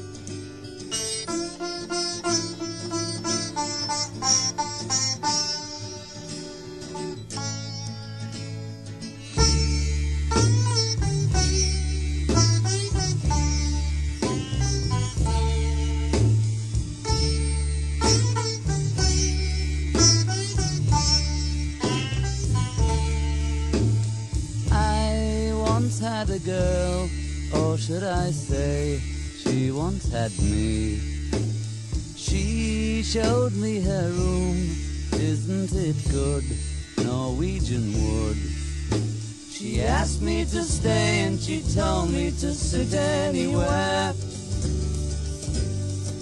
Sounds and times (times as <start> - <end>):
Music: 0.0 - 46.2.